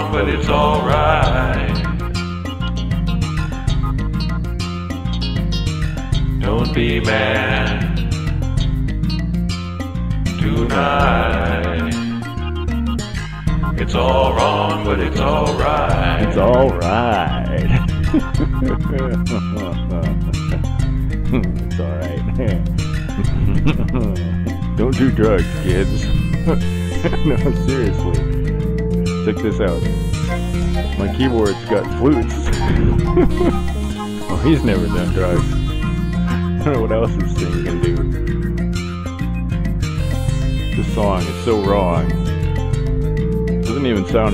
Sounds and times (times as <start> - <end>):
Rhythm and blues: 0.0 - 44.3.